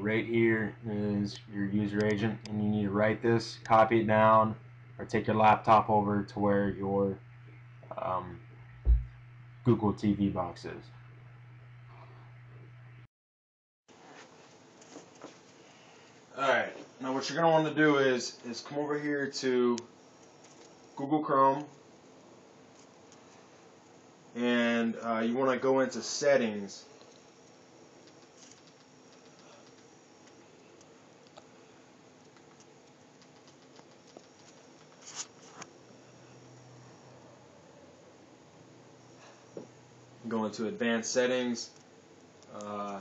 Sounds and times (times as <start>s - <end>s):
Inside, small room: 13.9s - 43.0s.